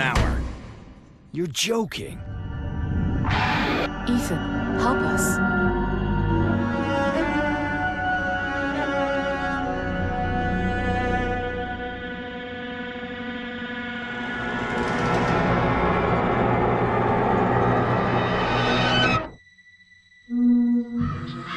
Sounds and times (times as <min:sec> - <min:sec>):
Cello: 0:05.6 - 0:13.6.